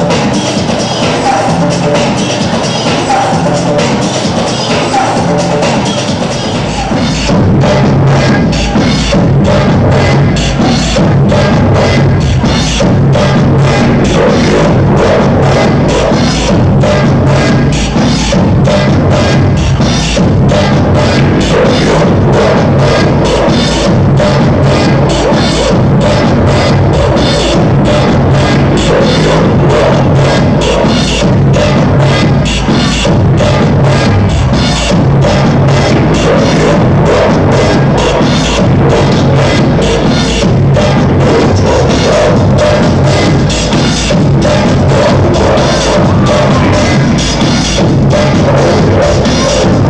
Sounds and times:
House music: 0.0 - 49.9
Techno: 0.0 - 49.9.

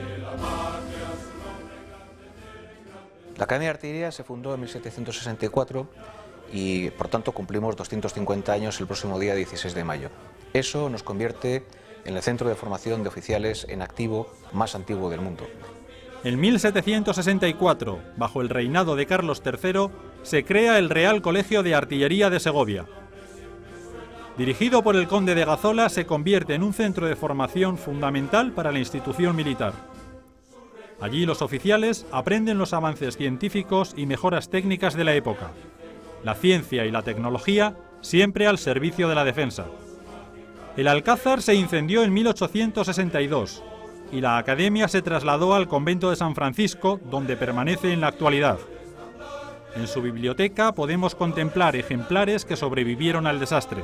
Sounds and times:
Music: 0.0 - 53.8
Speech: 3.4 - 5.9, 6.5 - 22.9, 24.4 - 29.8, 31.0 - 35.6, 36.3 - 39.7, 40.8 - 48.7, 49.8 - 53.8.

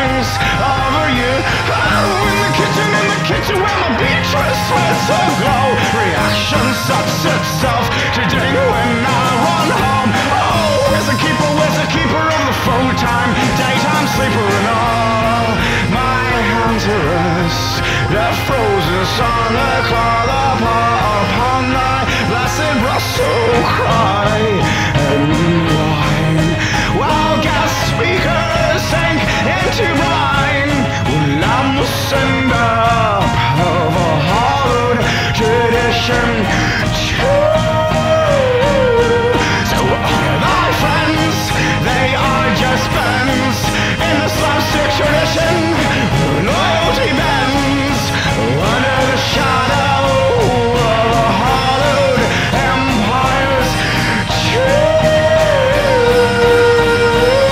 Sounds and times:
Music: 0.0 - 57.5.

